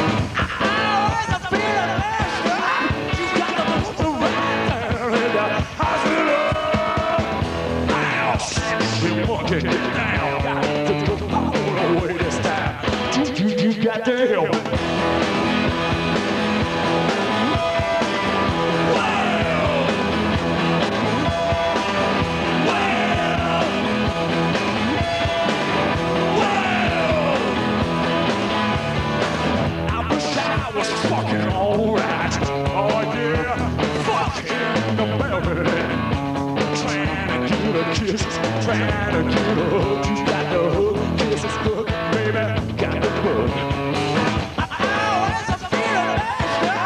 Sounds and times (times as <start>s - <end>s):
Music: 0.0s - 46.8s.